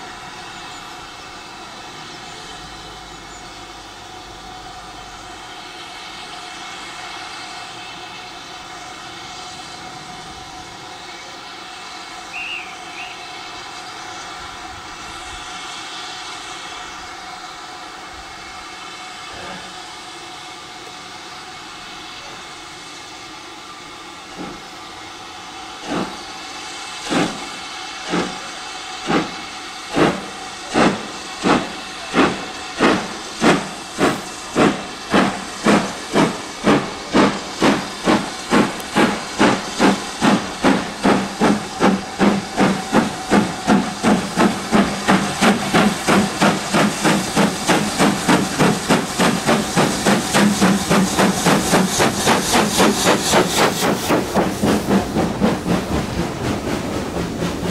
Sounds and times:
Hiss: 0.0s - 57.7s.

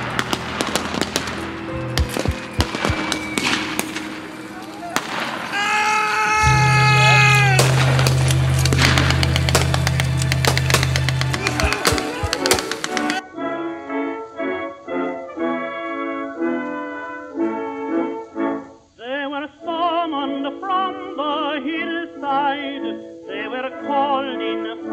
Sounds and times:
Music: 0.0s - 24.9s.

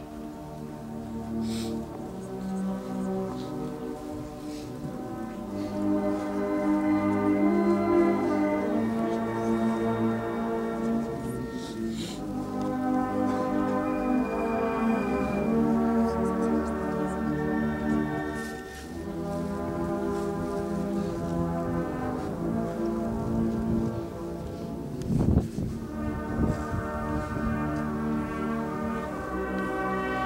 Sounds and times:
Music: 0.0s - 30.2s.

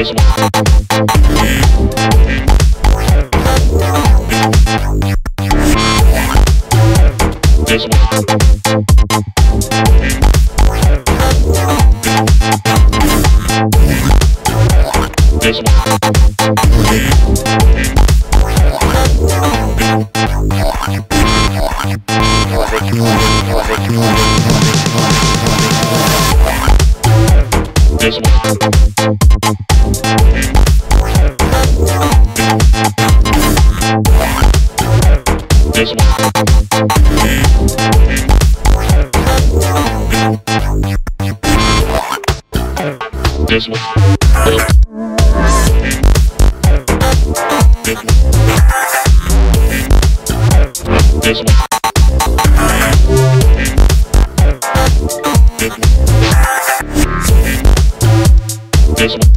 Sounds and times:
Sampler: 0.0s - 40.8s, 41.4s - 42.1s, 44.0s - 59.3s
House music: 0.0s - 59.3s.

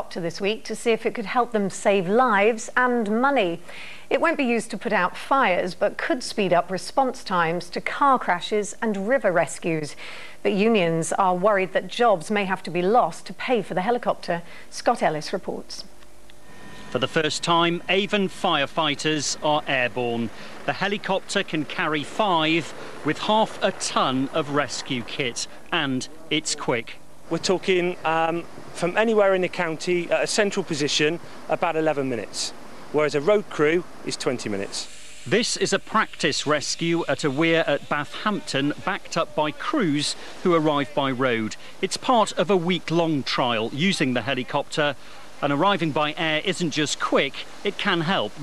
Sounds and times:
Speech: 0.0s - 9.9s, 10.5s - 15.9s, 17.0s - 48.4s
Vehicle: 16.5s - 34.8s.

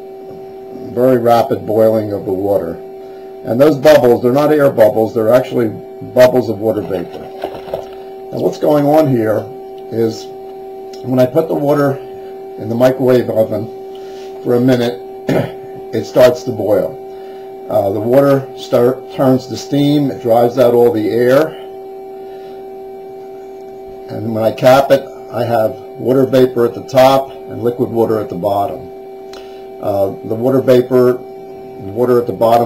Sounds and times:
Speech: 0.8s - 2.8s, 3.4s - 7.3s, 8.3s - 10.4s, 11.0s - 12.0s, 12.6s - 13.7s, 14.4s - 17.0s, 17.7s - 21.6s, 24.1s - 28.9s, 29.8s - 31.2s, 31.8s - 32.6s.

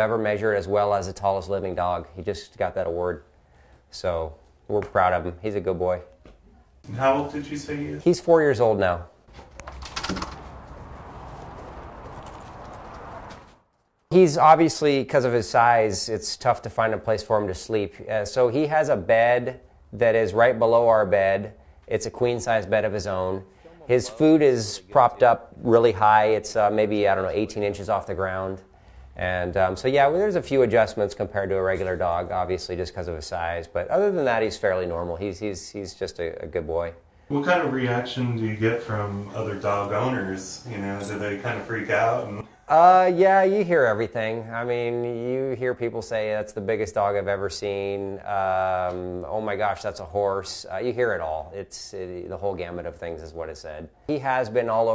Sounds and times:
Speech: 0.0s - 3.2s, 3.9s - 6.2s, 6.9s - 9.1s, 14.2s - 54.9s.

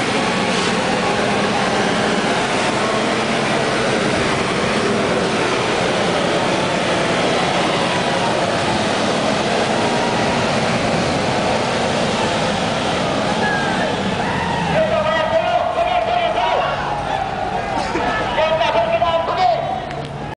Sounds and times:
Waterfall: 0.0s - 20.3s
Speech: 14.8s - 19.9s.

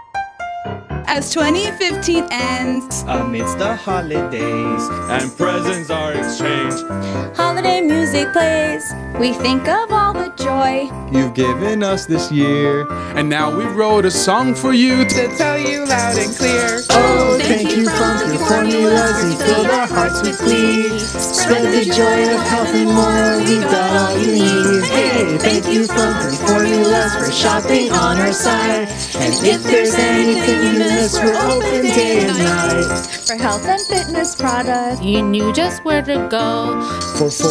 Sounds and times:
Christmas music: 0.0s - 37.5s
Christian music: 1.1s - 37.5s.

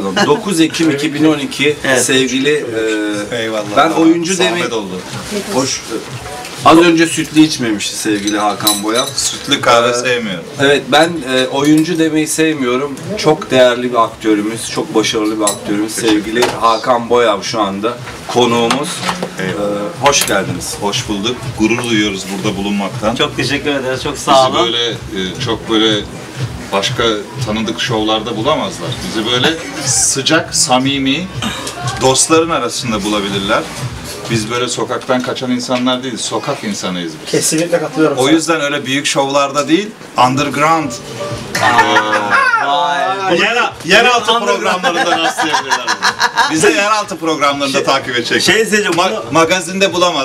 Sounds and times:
Speech: 0.0s - 33.7s, 41.7s - 50.2s.

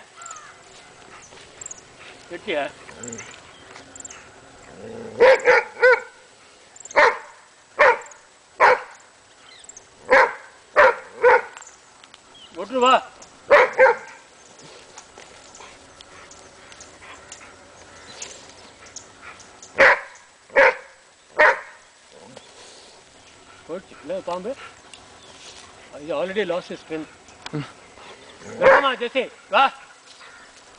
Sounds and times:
Bow-wow: 5.1s - 6.2s, 7.0s - 9.0s, 10.1s - 11.6s, 13.5s - 14.2s, 19.8s - 21.8s, 28.6s - 29.0s.

